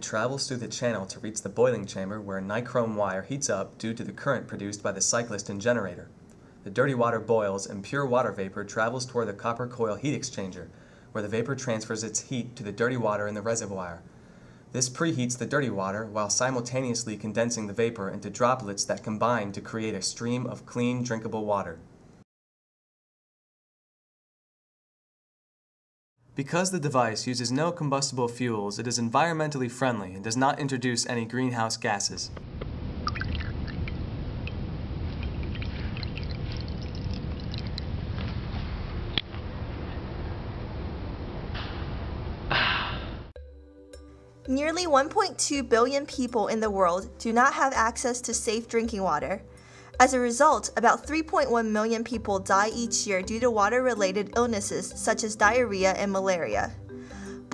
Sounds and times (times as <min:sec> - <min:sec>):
Speech: 0:00.0 - 0:06.1, 0:06.7 - 0:14.0, 0:14.8 - 0:21.8, 0:26.4 - 0:32.3, 0:44.5 - 0:49.4, 0:50.0 - 0:56.8
Water: 0:32.6 - 0:38.7.